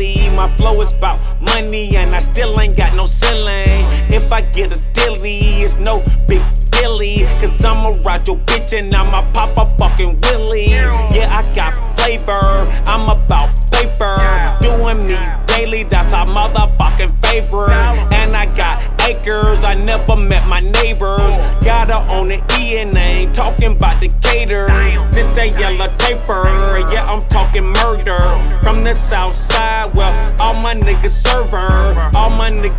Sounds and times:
Music: 0.0s - 32.7s.

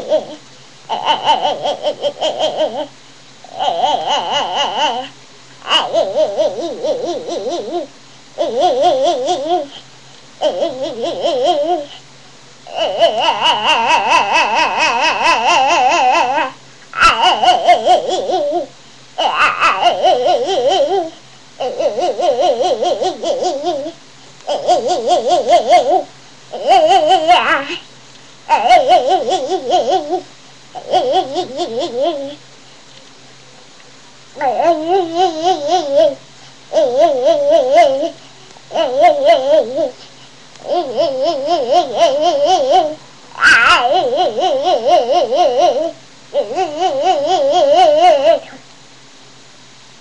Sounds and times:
Babbling: 0.0s - 2.9s, 3.5s - 9.8s, 10.4s - 12.0s, 12.7s - 27.9s, 28.5s - 32.4s, 34.4s - 40.0s, 40.6s - 48.6s.

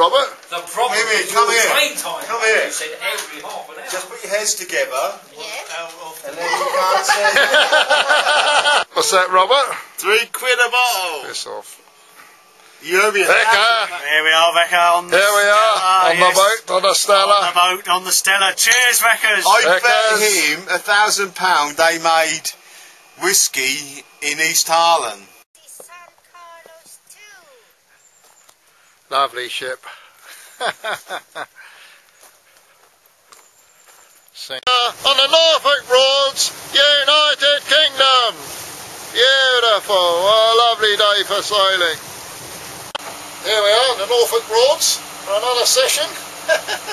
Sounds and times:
Speech: 8.9s - 11.8s, 12.8s - 22.6s, 23.2s - 27.6s, 29.1s - 29.9s, 34.4s - 38.4s, 39.2s - 42.0s, 43.4s - 46.2s.

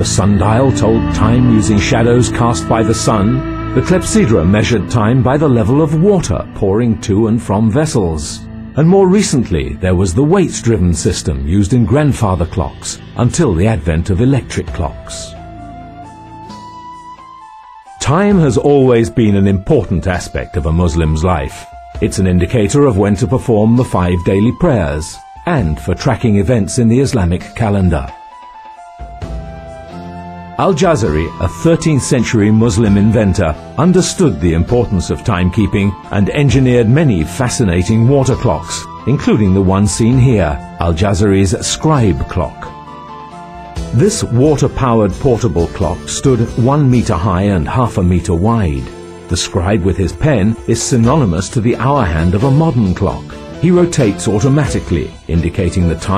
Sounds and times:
Speech: 0.0s - 15.4s, 18.0s - 28.2s, 30.6s - 42.8s, 43.9s - 56.1s
Music: 0.0s - 56.1s.

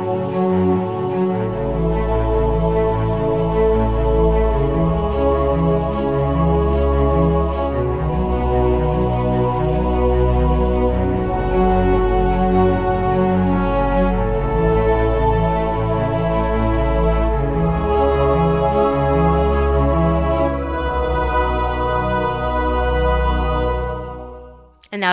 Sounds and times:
Music: 0.0s - 25.1s.

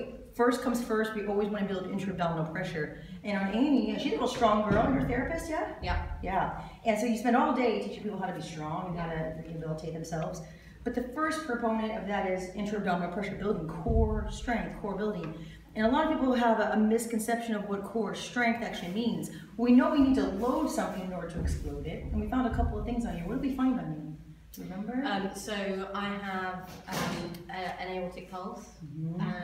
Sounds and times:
Speech: 0.0s - 29.4s.

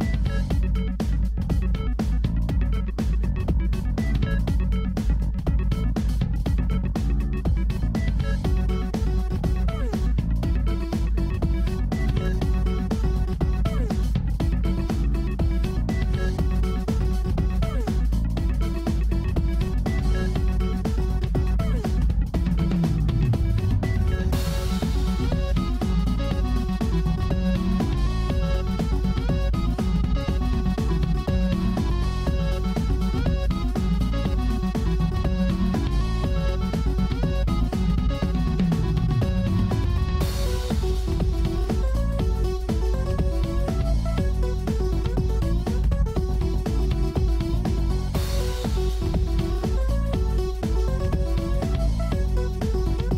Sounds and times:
Techno: 0.0s - 53.1s.

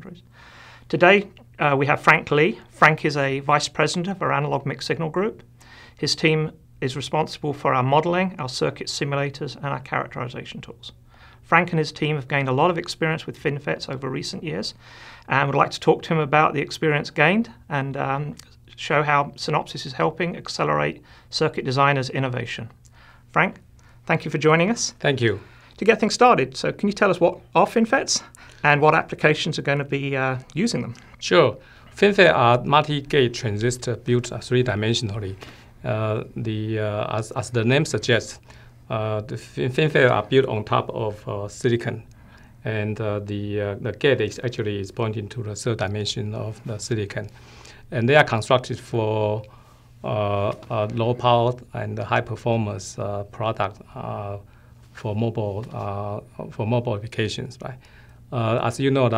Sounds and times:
Speech: 0.0s - 0.2s, 0.9s - 47.3s, 47.9s - 59.1s.

